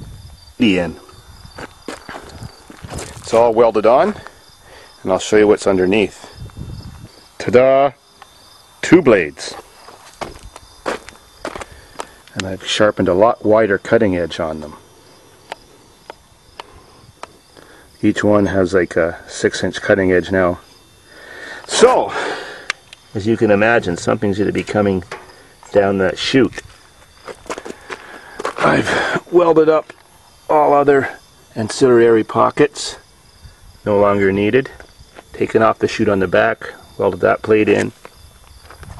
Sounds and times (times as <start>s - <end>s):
Speech: 0.6s - 1.0s, 3.2s - 4.3s, 5.0s - 6.4s, 7.4s - 8.0s, 8.8s - 9.6s, 12.3s - 14.8s, 18.0s - 20.6s, 21.7s - 22.3s, 23.1s - 25.1s, 25.7s - 26.6s, 28.6s - 33.0s, 33.8s - 38.0s.